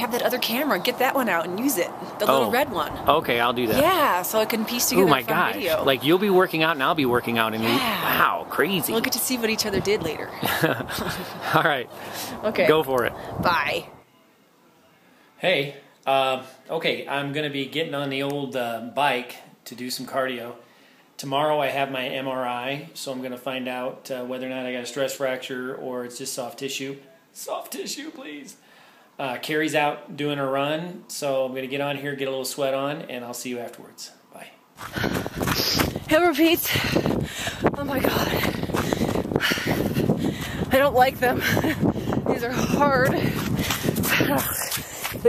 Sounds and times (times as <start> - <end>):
Speech: 0.0 - 8.5, 15.4 - 20.6
Outside, rural or natural: 0.0 - 14.1, 34.7 - 45.2.